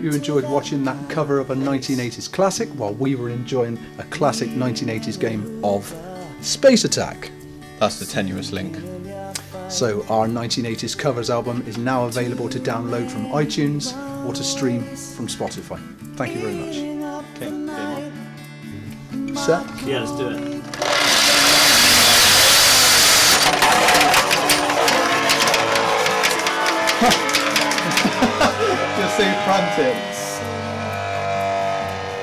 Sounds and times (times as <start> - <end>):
Singing: 0.0 - 2.1, 4.0 - 6.4, 8.4 - 15.5, 16.2 - 18.2, 19.1 - 21.1
Speech: 0.0 - 8.9, 9.7 - 18.0, 19.4 - 20.4, 29.0 - 30.4
Music: 0.0 - 32.2.